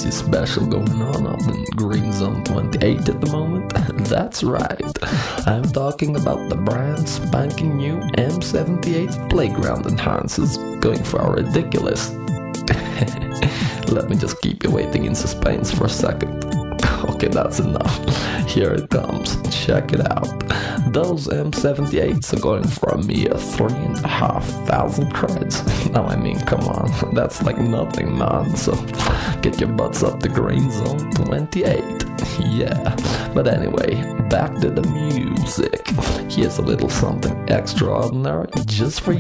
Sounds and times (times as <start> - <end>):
Music: 0.0 - 39.2
Speech: 0.0 - 39.2.